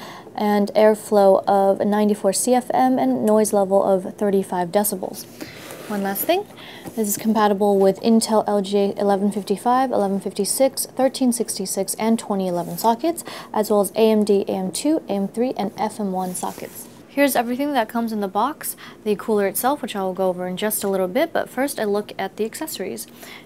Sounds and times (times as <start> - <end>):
Speech: 0.4 - 5.2, 5.9 - 23.1.